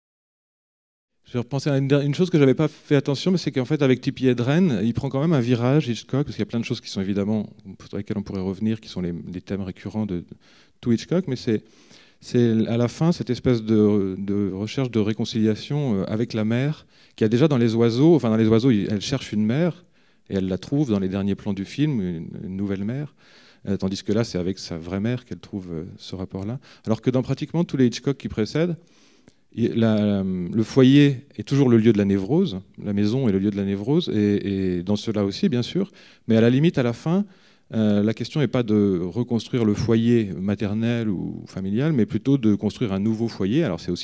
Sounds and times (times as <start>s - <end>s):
Speech: 1.3s - 28.8s, 29.6s - 44.0s.